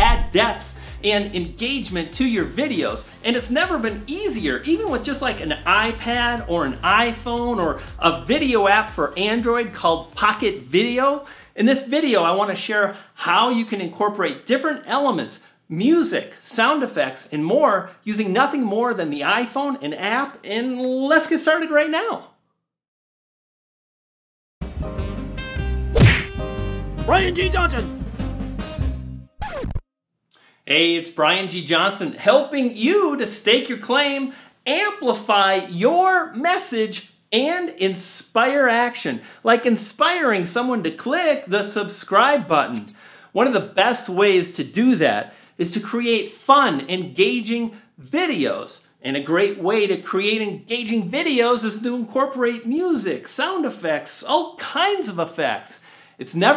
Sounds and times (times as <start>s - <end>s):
Music: 0.0s - 11.4s, 24.6s - 29.8s
Speech: 0.0s - 22.3s, 27.1s - 27.9s, 30.7s - 56.5s.